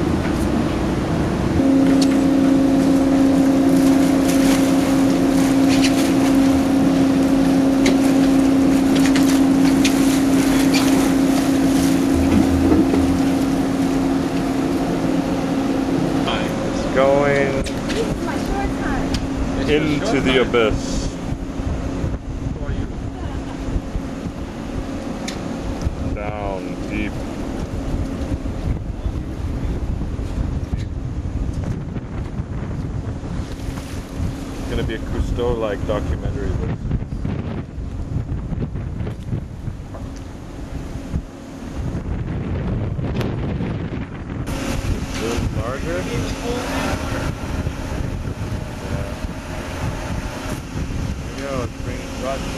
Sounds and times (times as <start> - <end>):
Waves, surf: 0.0 - 52.5
Wind noise (microphone): 7.9 - 14.4, 16.2 - 52.5.